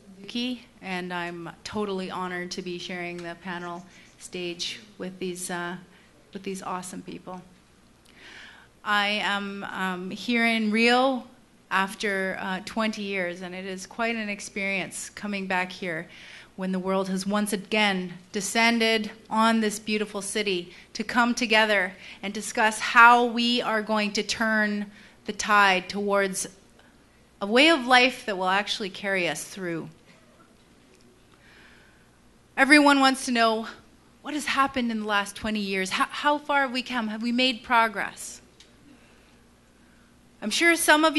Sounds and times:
Female speech, woman speaking: 0:00.0 - 0:05.8, 0:06.4 - 0:07.5, 0:08.9 - 0:26.5, 0:27.4 - 0:30.0, 0:32.6 - 0:38.4, 0:40.4 - 0:41.1
Narration, monologue: 0:00.0 - 0:41.1.

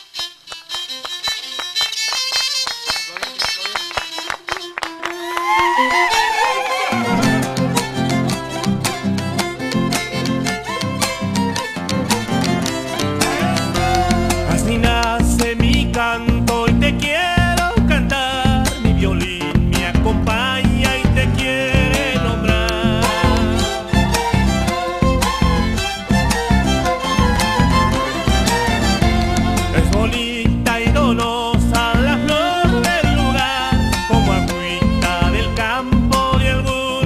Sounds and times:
Violin, fiddle: 0:00.0 - 0:15.1, 0:22.0 - 0:30.3, 0:32.0 - 0:35.9.

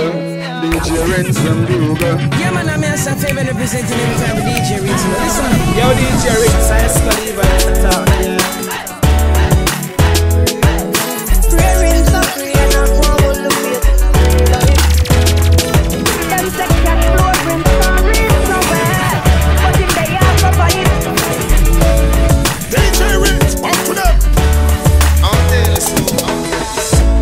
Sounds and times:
Music: 0:00.0 - 0:27.2.

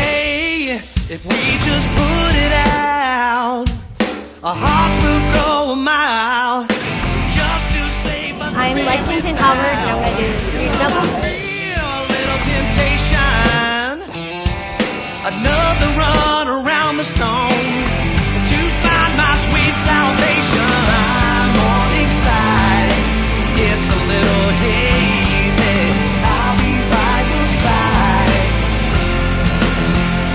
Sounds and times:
Music: 0:00.0 - 0:30.3
Speech: 0:07.4 - 0:14.2.

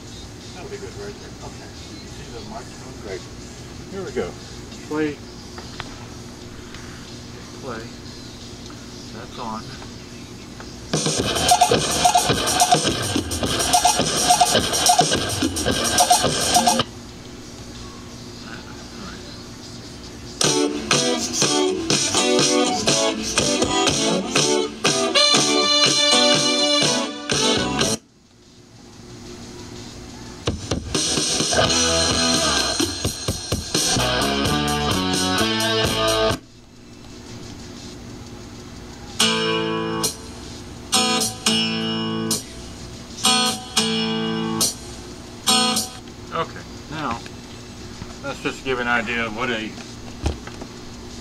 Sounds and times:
Jazz: 0:10.9 - 0:17.2, 0:20.3 - 0:46.0.

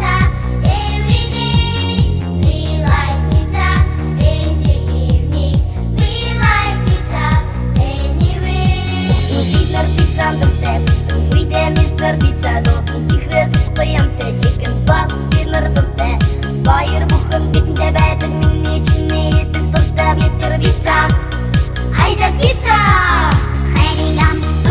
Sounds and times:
Music: 0:00.0 - 0:24.7.

